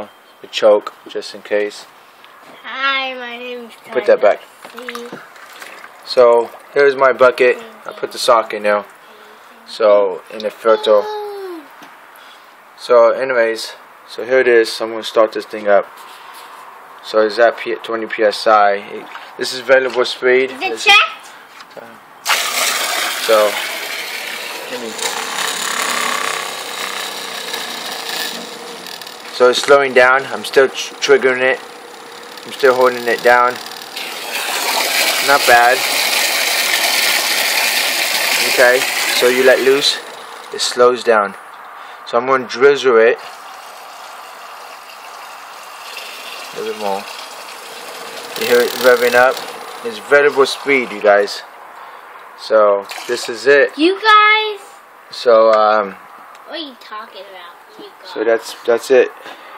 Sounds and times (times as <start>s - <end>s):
Water: 4.6s - 6.8s, 19.0s - 19.6s, 22.3s - 25.4s, 31.7s - 40.5s, 43.2s - 50.9s, 52.8s - 53.5s
Pump (liquid): 4.7s - 7.5s, 22.2s - 40.8s, 43.2s - 51.1s, 52.8s - 53.4s.